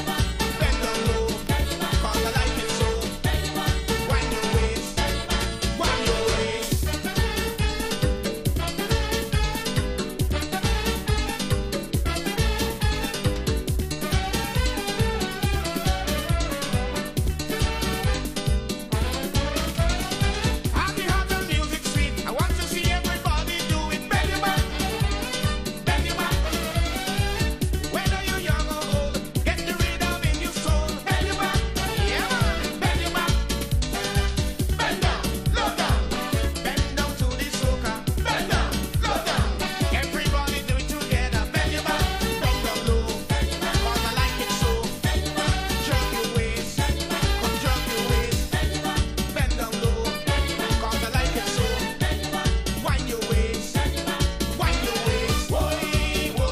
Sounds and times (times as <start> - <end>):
Music: 0.0 - 56.5.